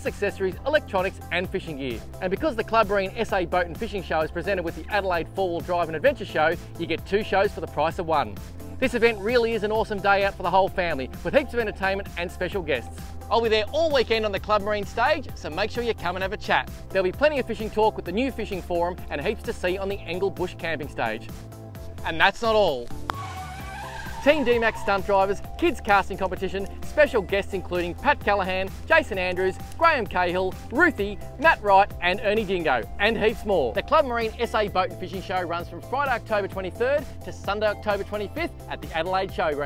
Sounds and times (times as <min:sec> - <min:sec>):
Speech: 0:00.0 - 0:21.3, 0:22.0 - 0:22.9, 0:24.2 - 0:39.6
Music: 0:00.0 - 0:39.6.